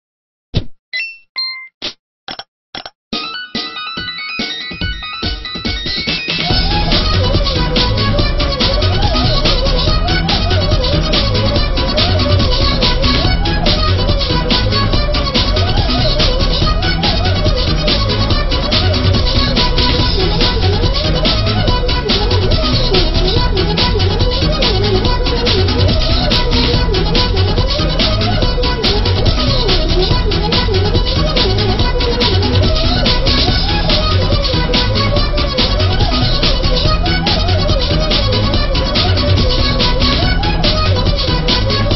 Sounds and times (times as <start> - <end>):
Music: 3.2 - 41.9.